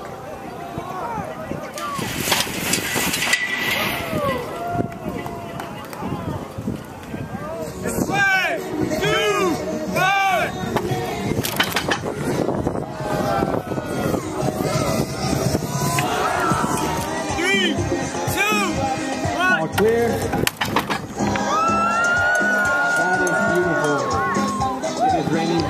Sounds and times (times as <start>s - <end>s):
Music: 7.4s - 25.7s.